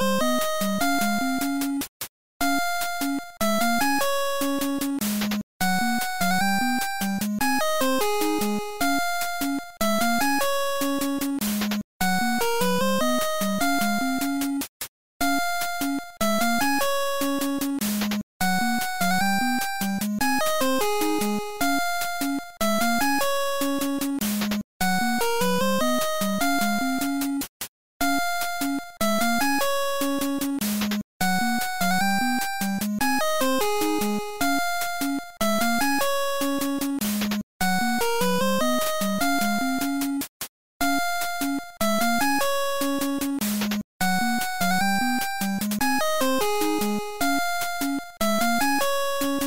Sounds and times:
Video game music: 0.0 - 49.4.

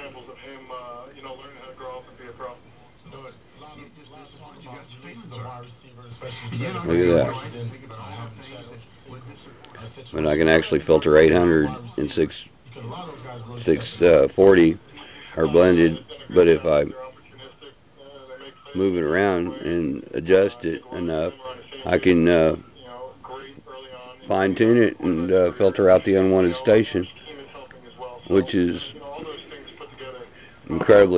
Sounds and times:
Radio: 0.0 - 31.1
Speech: 0.0 - 31.1.

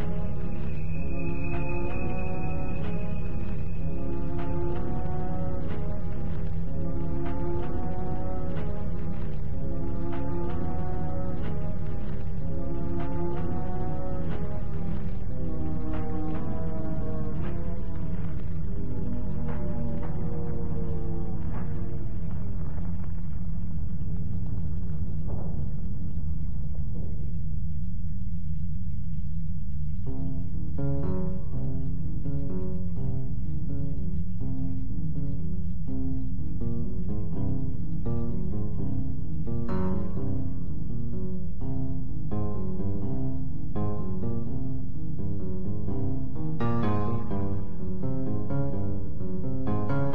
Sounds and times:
Tender music: 0.0 - 22.7.

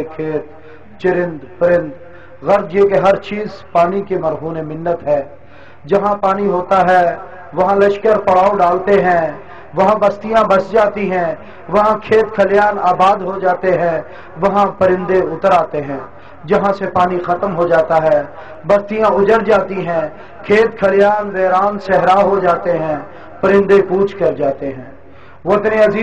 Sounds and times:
Speech: 0.0 - 26.0.

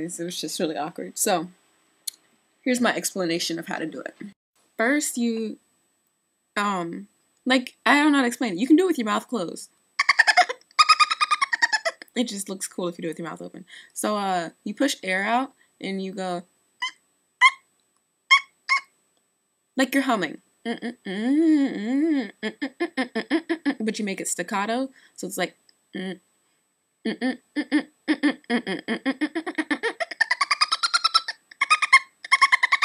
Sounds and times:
Speech: 0.0 - 1.6, 2.7 - 5.6, 6.6 - 9.7, 12.0 - 16.4, 19.8 - 26.2.

